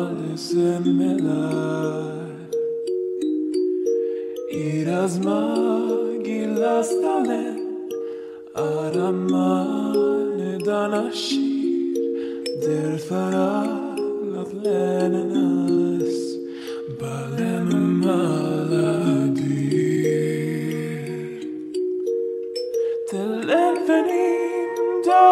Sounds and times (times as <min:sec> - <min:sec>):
Music: 0:00.0 - 0:25.3.